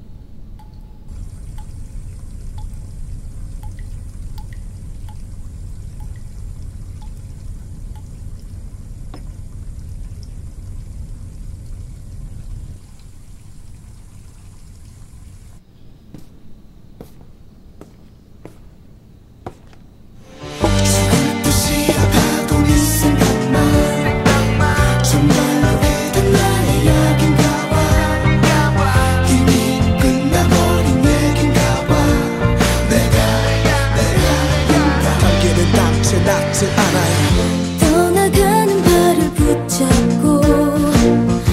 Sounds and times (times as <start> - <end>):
Independent music: 20.3 - 41.5.